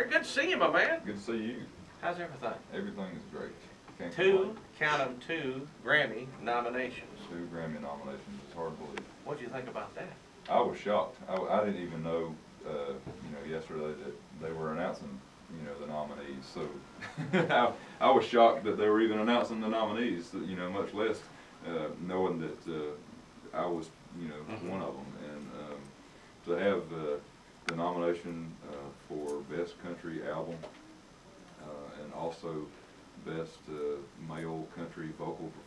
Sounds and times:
Speech: 0.0 - 25.9, 26.5 - 30.7, 31.6 - 35.6.

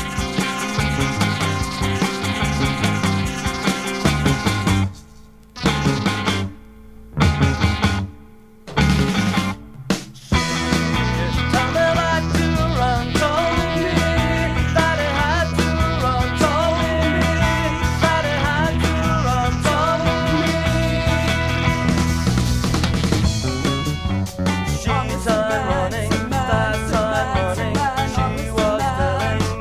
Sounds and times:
Psychedelic rock: 0.0 - 29.6.

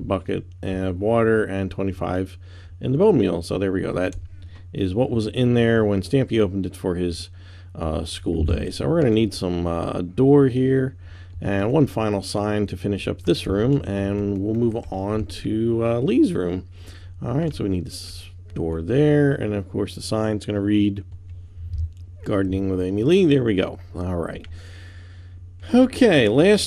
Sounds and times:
Speech: 0.0 - 21.1, 22.2 - 24.5, 25.6 - 26.6.

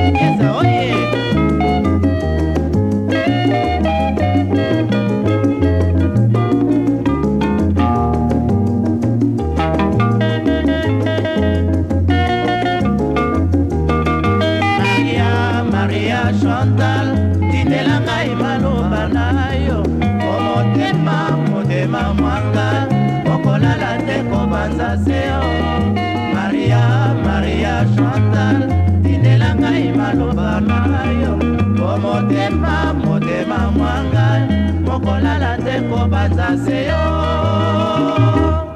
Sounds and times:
Salsa music: 0.0 - 38.7.

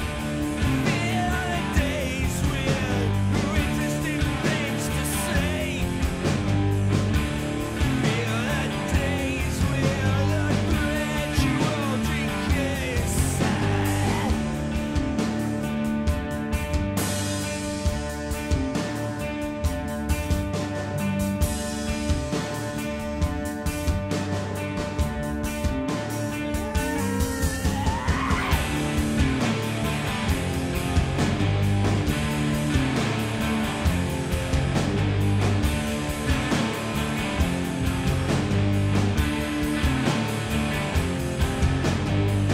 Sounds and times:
Music: 0.0 - 42.5.

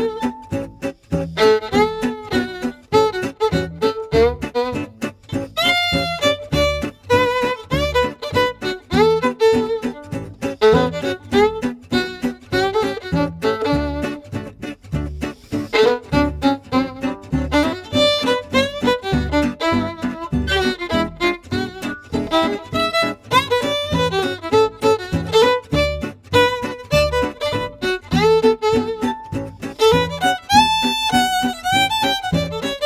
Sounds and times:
Violin, fiddle: 0.0 - 32.8.

